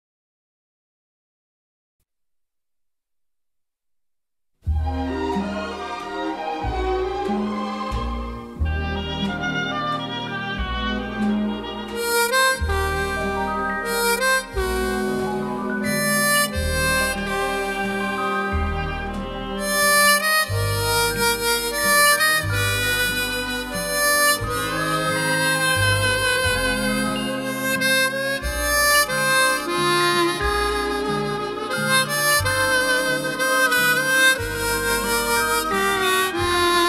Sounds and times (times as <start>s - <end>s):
Bowed string instrument: 4.7s - 36.8s
Harmonica: 8.6s - 36.8s.